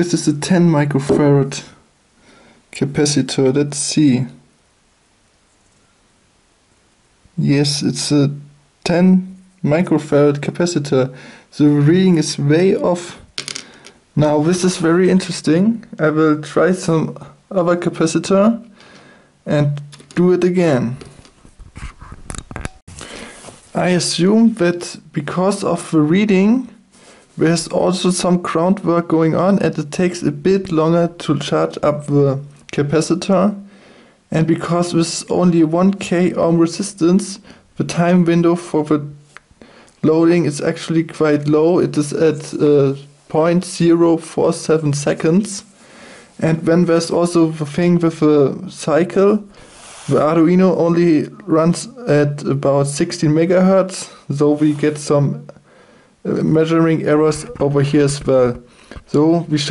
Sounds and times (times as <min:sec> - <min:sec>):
Speech: 0:00.0 - 0:01.8, 0:02.8 - 0:04.4, 0:07.4 - 0:13.3, 0:14.2 - 0:18.7, 0:19.5 - 0:21.1, 0:23.7 - 0:26.8, 0:27.4 - 0:33.6, 0:34.3 - 0:39.2, 0:40.0 - 0:45.7, 0:46.4 - 0:49.5, 0:50.1 - 0:55.6, 0:56.2 - 0:59.7
Inside, small room: 0:00.0 - 0:59.7.